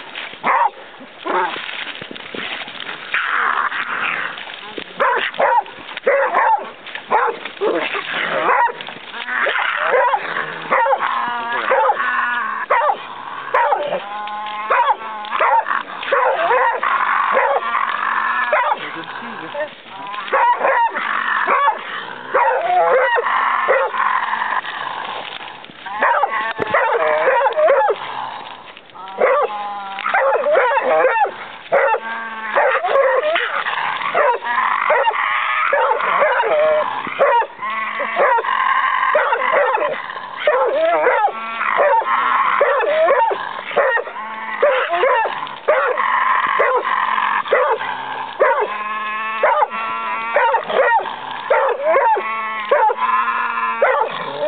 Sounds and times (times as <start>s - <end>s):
Bow-wow: 0.4s - 1.6s, 5.0s - 17.8s, 18.4s - 24.3s, 25.9s - 28.0s, 29.1s - 54.4s.